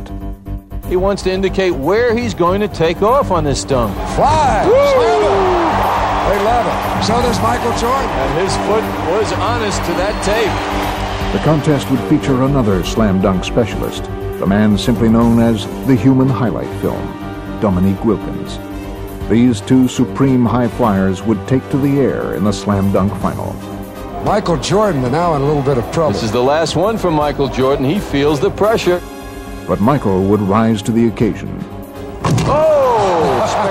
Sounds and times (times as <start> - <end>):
Music: 0.0 - 33.7
Speech: 0.9 - 4.8, 11.4 - 18.6, 19.3 - 23.6, 24.2 - 29.0, 29.7 - 31.6.